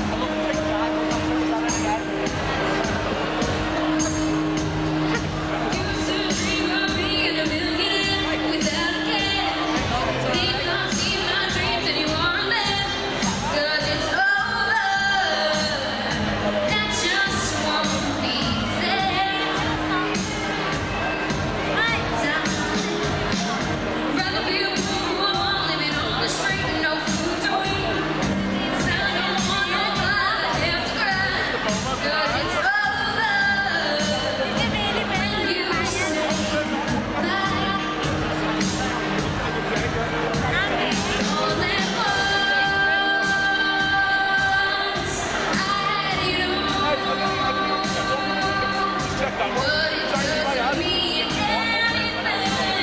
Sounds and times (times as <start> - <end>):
Music: 0.0 - 52.8
Speech: 0.0 - 52.8
Female singing: 4.0 - 38.9, 40.4 - 52.8.